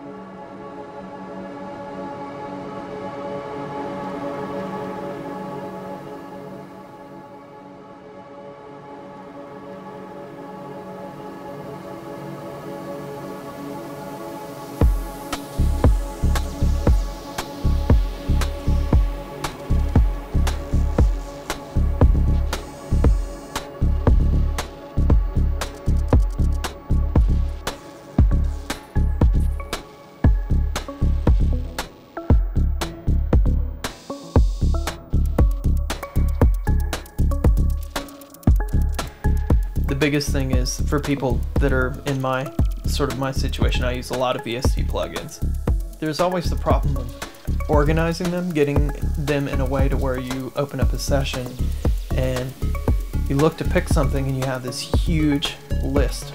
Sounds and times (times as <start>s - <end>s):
Music: 0.0s - 56.3s.